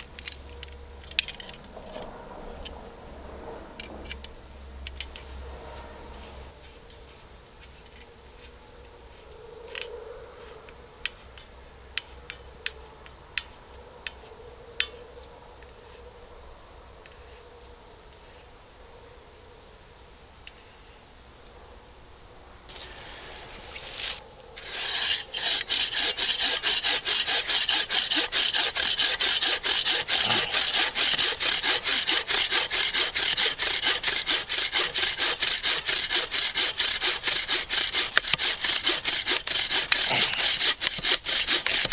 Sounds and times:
Outside, rural or natural: 0.0 - 41.9.

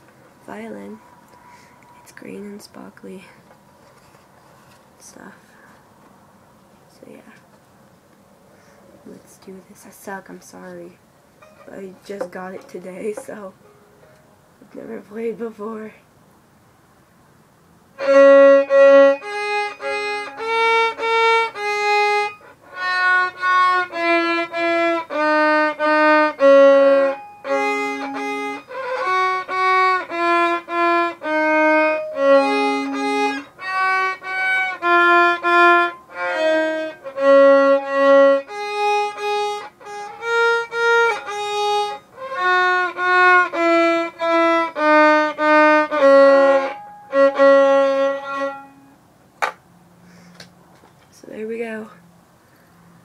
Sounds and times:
Speech: 0.4 - 1.0, 2.0 - 3.4, 6.9 - 7.5, 9.0 - 11.0, 11.7 - 13.6, 14.6 - 16.0, 51.1 - 52.0
Violin, fiddle: 18.0 - 48.9.

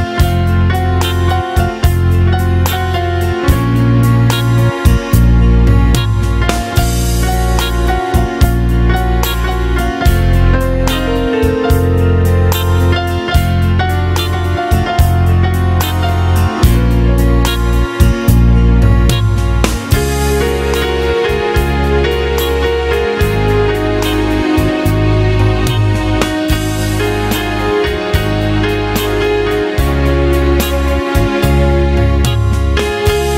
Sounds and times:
Music: 0.0 - 33.3.

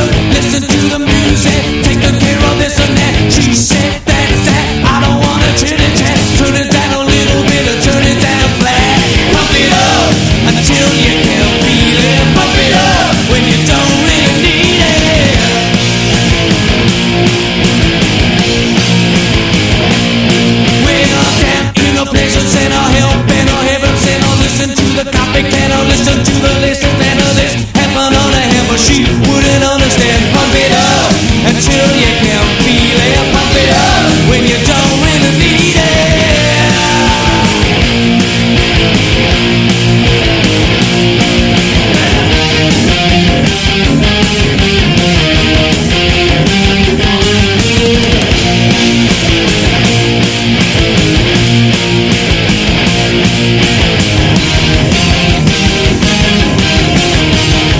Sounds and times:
Music: 0.0 - 57.8.

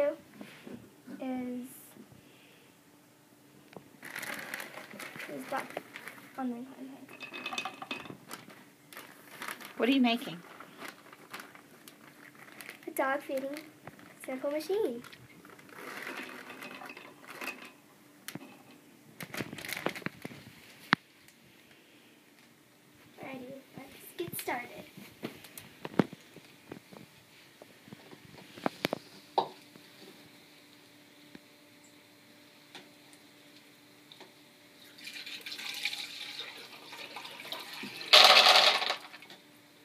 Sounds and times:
Child speech, kid speaking: 0.0 - 0.2, 1.1 - 2.0, 5.2 - 5.7, 6.4 - 7.1, 12.8 - 15.1, 23.2 - 24.9.

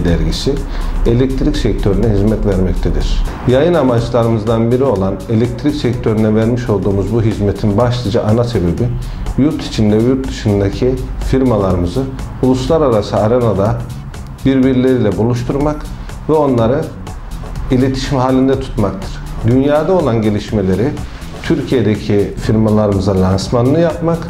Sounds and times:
Speech: 0.0 - 17.0, 17.7 - 24.3
Music: 0.0 - 24.3.

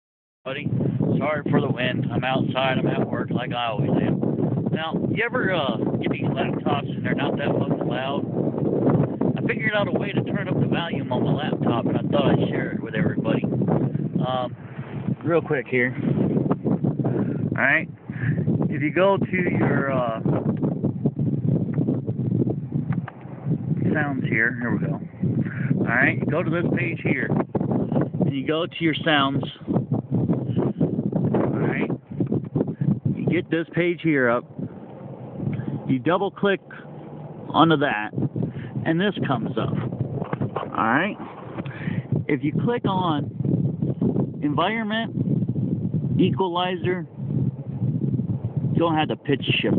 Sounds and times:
Speech: 0.5 - 8.2, 9.4 - 13.5, 14.2 - 14.5, 15.2 - 16.0, 17.6 - 20.3, 23.8 - 25.0, 25.8 - 27.4, 28.3 - 29.6, 31.5 - 31.9, 33.2 - 34.4, 35.9 - 36.8, 37.5 - 38.1, 38.8 - 39.8, 40.7 - 41.2, 42.3 - 43.3, 44.4 - 45.1, 46.2 - 47.1, 48.8 - 49.7.

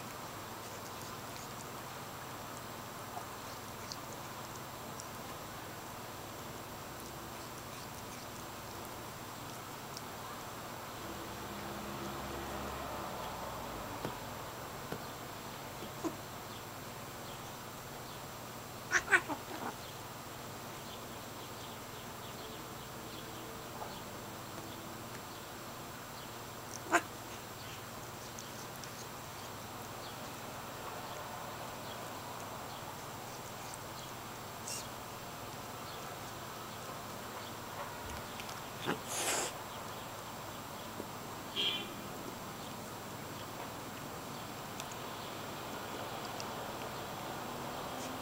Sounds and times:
Domestic animals, pets: 0.0 - 13.3, 14.8 - 20.1, 20.7 - 42.0, 42.6 - 48.2.

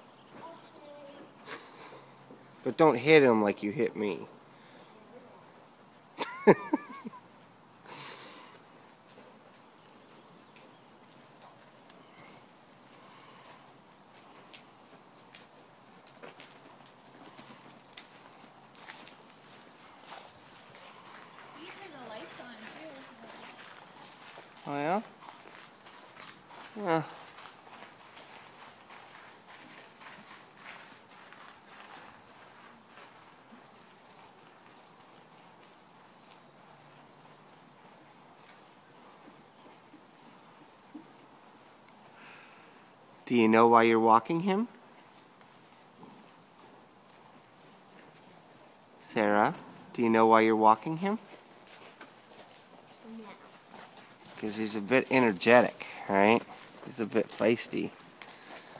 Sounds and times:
Clip-clop: 7.0 - 43.2, 43.9 - 58.7.

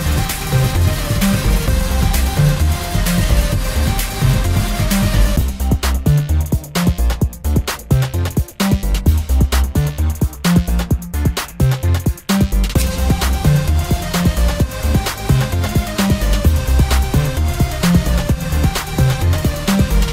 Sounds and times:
Music: 0.0 - 20.1.

